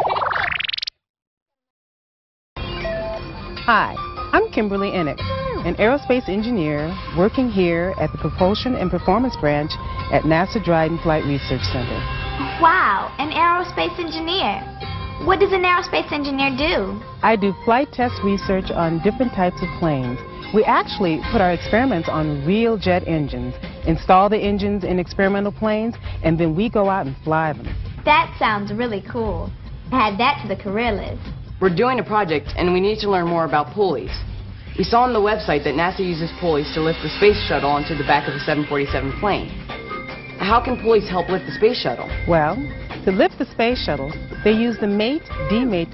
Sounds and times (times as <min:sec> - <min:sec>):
Music: 0:02.6 - 0:45.9.